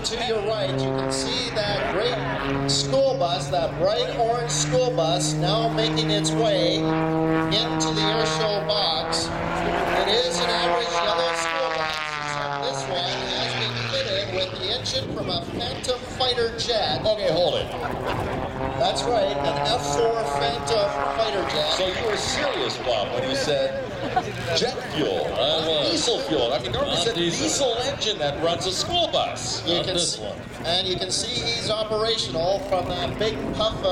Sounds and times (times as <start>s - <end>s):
Speech: 0.0s - 6.8s, 10.0s - 11.9s, 12.6s - 17.8s, 18.8s - 33.9s
Accelerating, revving, vroom: 0.6s - 14.1s, 17.9s - 23.4s.